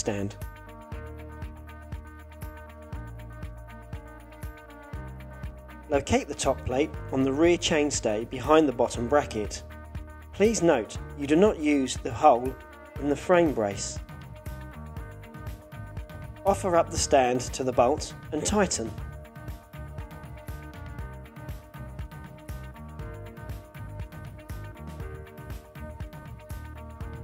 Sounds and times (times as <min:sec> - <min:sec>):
Speech: 0:00.0 - 0:00.4, 0:05.9 - 0:09.6, 0:10.4 - 0:14.0, 0:16.4 - 0:19.0
Music: 0:00.0 - 0:27.2.